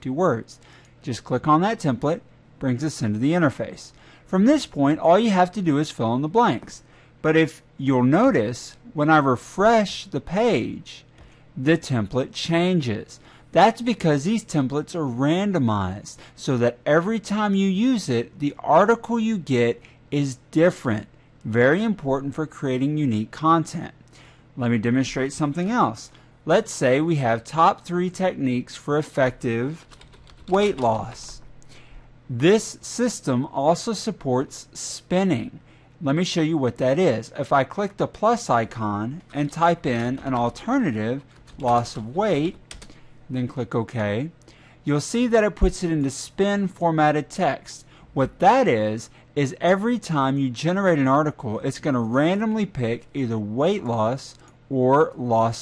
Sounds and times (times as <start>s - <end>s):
Speech: 0.0s - 24.0s, 24.6s - 31.4s, 32.3s - 42.6s, 43.3s - 55.6s.